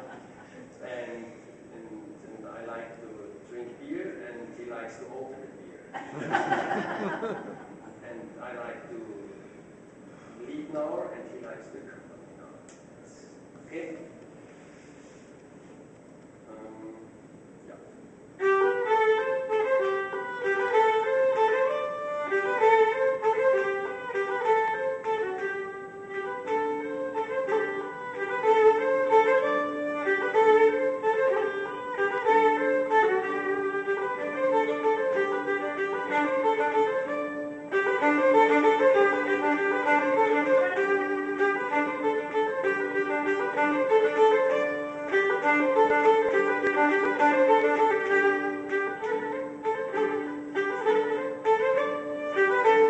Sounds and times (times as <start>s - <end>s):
Speech: 0.8s - 5.9s, 8.0s - 9.4s, 10.4s - 14.2s, 16.5s - 18.0s.